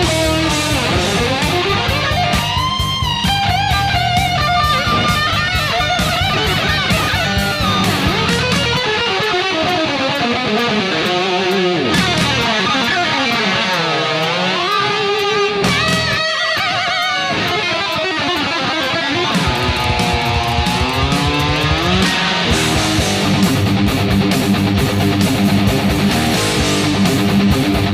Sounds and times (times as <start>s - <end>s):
Electric guitar: 0.0s - 27.9s.